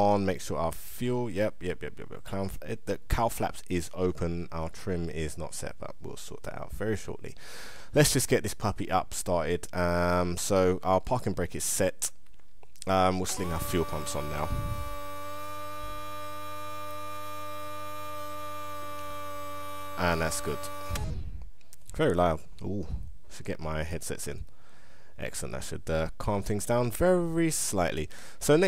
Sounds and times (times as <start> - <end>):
Hum: 13.3 - 21.8.